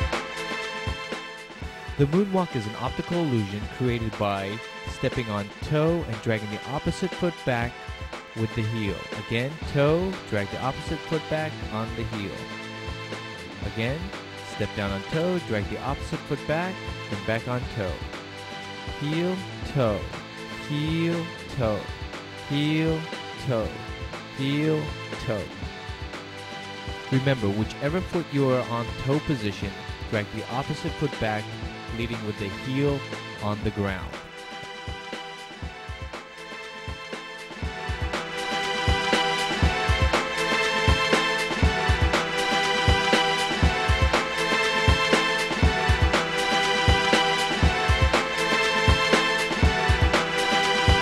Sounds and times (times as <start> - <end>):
Music: 0.0 - 51.0
Speech: 2.0 - 7.8, 8.4 - 12.5, 13.5 - 18.1, 19.0 - 23.8, 24.4 - 25.6, 27.1 - 34.2.